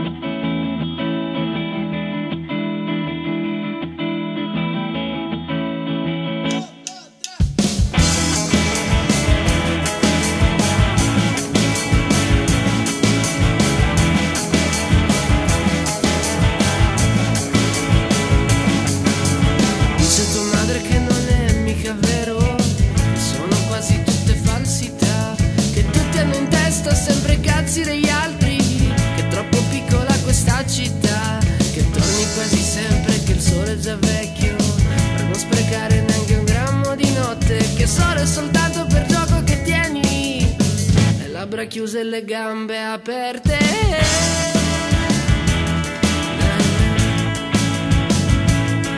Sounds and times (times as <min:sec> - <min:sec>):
Rock music: 0:00.0 - 0:41.9, 0:43.4 - 0:48.9.